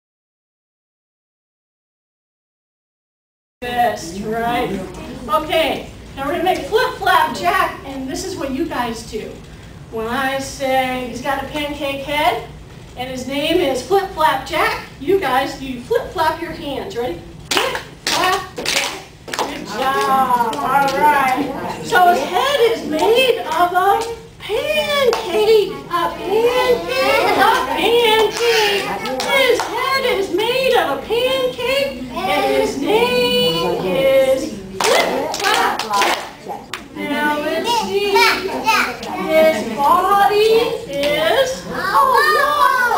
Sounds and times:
Speech: 3.6 - 42.9.

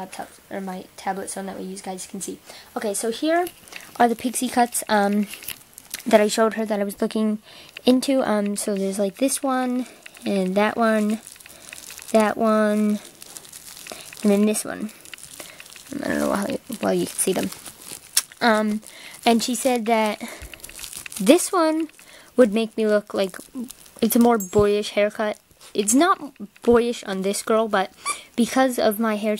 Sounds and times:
Speech: 0.0 - 5.3, 6.0 - 11.2, 12.1 - 13.0, 14.2 - 14.9, 15.9 - 17.5, 18.4 - 20.3, 21.2 - 29.3
Inside, small room: 0.0 - 29.3.

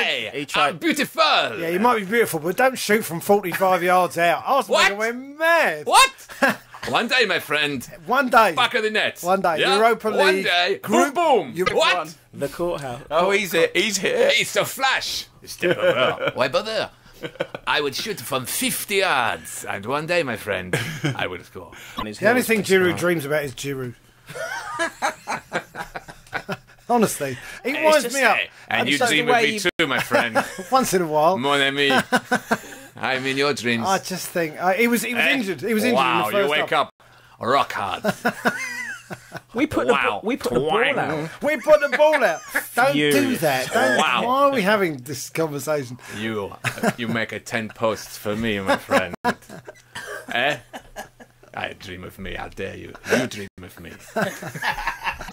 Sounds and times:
Speech: 26.9 - 32.0.

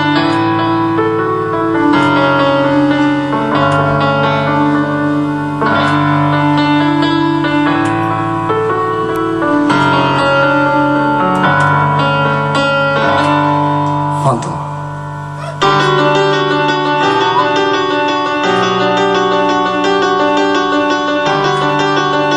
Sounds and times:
Music: 0.0 - 22.3
Speech: 14.2 - 14.7.

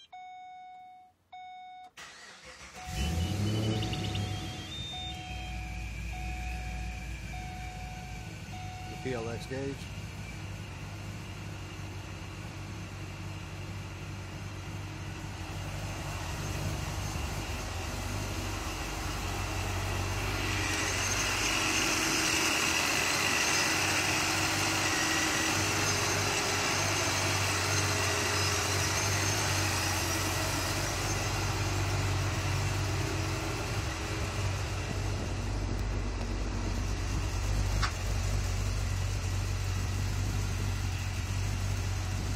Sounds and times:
Car: 0.0 - 42.3
Engine: 1.4 - 42.3.

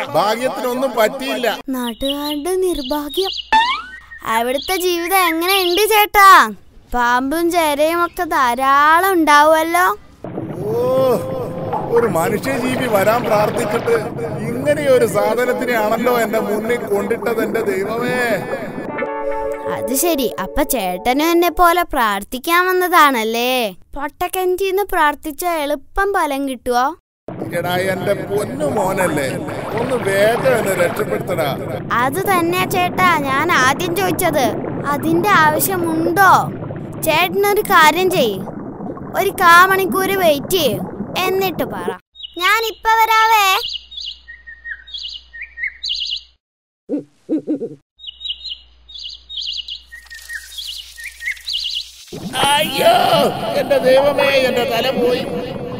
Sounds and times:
Chirp, tweet: 1.9 - 5.9, 42.2 - 42.9, 43.6 - 46.4, 48.0 - 52.0.

